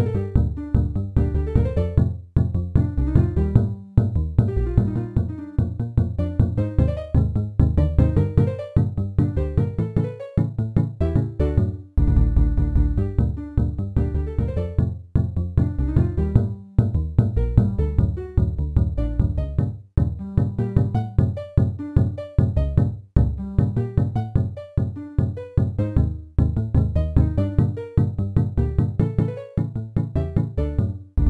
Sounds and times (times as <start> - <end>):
Funny music: 4.4 - 14.8.